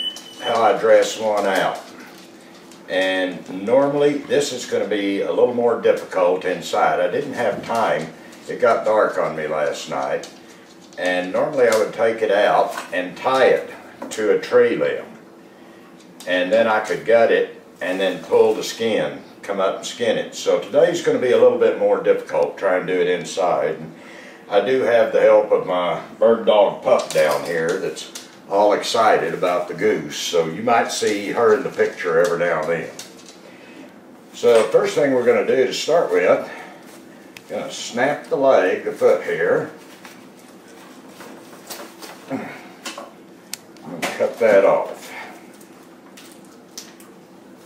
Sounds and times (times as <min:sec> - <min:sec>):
Speech: 0:00.4 - 0:02.0, 0:02.9 - 0:10.4, 0:11.0 - 0:15.2, 0:16.2 - 0:33.0, 0:34.4 - 0:36.6, 0:37.5 - 0:39.8, 0:43.8 - 0:45.4.